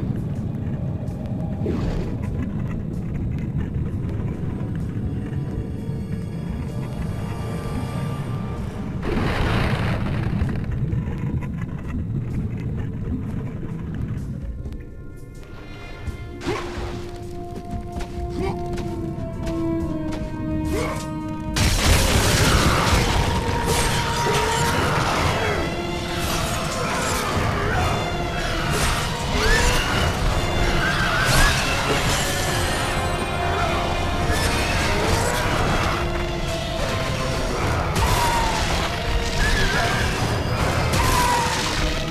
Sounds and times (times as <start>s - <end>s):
Music: 0.0s - 42.1s.